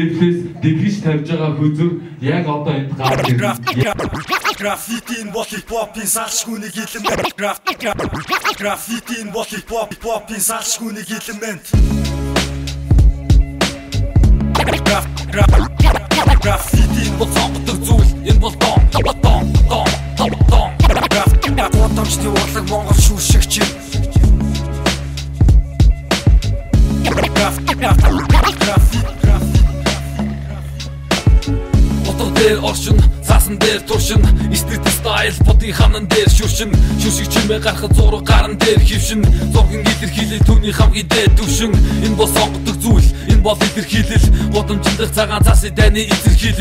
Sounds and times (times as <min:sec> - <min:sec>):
Dance music: 0:03.0 - 0:05.6, 0:06.9 - 0:09.3, 0:11.8 - 0:46.6.